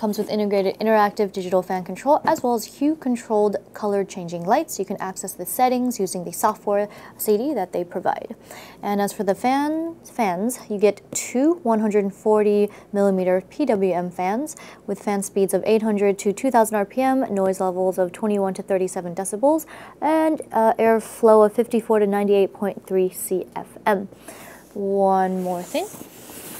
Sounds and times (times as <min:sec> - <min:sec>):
Speech: 0:00.0 - 0:24.1, 0:24.8 - 0:26.0.